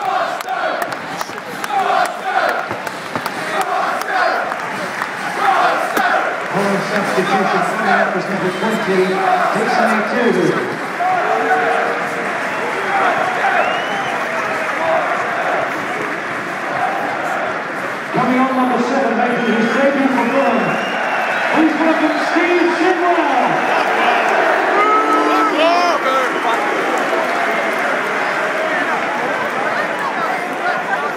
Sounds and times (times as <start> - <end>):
Speech: 6.5 - 10.8, 18.1 - 20.8, 21.5 - 23.7.